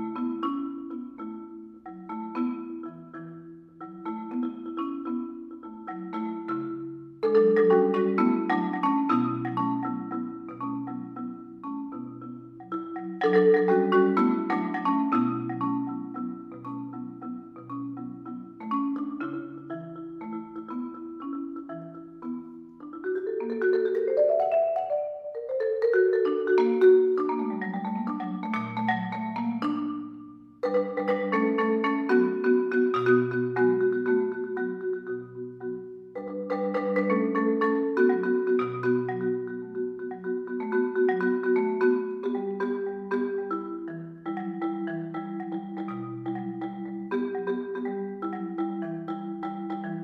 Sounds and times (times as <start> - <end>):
Marimba, xylophone: 0.0 - 50.0
Vibraphone: 0.0 - 50.0.